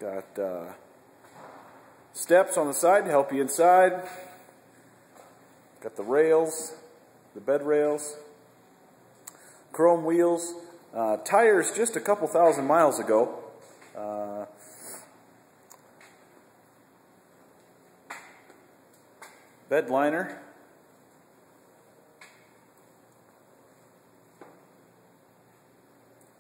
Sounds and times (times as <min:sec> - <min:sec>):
Speech: 0:00.0 - 0:00.8, 0:02.2 - 0:04.2, 0:05.8 - 0:08.4, 0:09.8 - 0:14.6, 0:19.7 - 0:20.6.